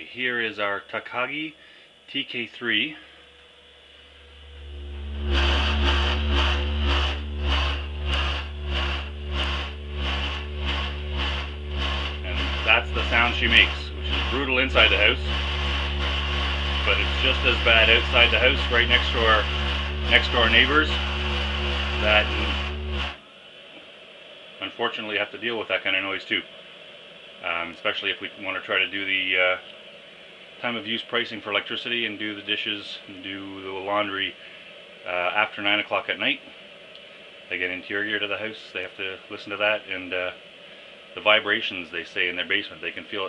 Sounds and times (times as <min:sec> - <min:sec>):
Speech: 0:00.0 - 0:03.1, 0:12.2 - 0:15.4, 0:16.8 - 0:21.1, 0:22.0 - 0:22.6, 0:24.6 - 0:26.5, 0:27.4 - 0:29.7, 0:30.6 - 0:34.4, 0:35.1 - 0:36.6, 0:37.5 - 0:40.4, 0:41.2 - 0:43.2.